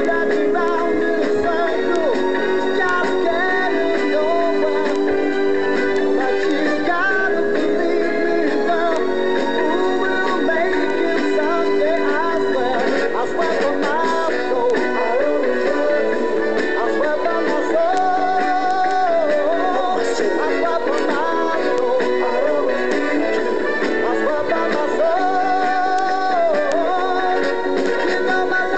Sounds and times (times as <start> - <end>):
Soul music: 0.0 - 28.7.